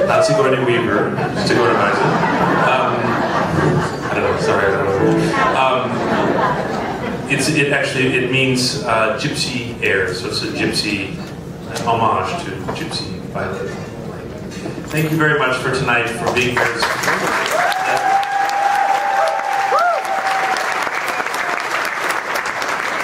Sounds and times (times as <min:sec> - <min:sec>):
Speech: 0:00.0 - 0:03.2, 0:04.1 - 0:06.0, 0:07.3 - 0:14.3, 0:14.9 - 0:17.0.